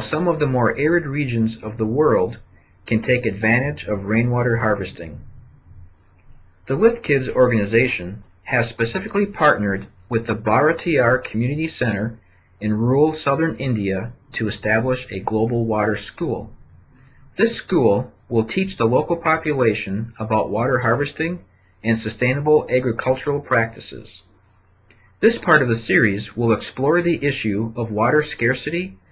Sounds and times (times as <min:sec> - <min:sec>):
Speech: 0:00.0 - 0:05.6, 0:06.7 - 0:16.6, 0:17.4 - 0:24.3, 0:25.2 - 0:29.1.